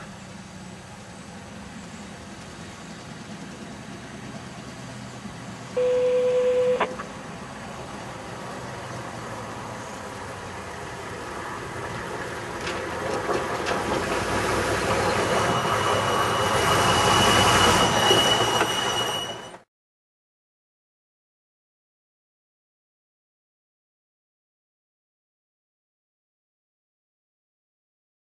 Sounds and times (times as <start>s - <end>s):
Vehicle: 0.0s - 19.7s.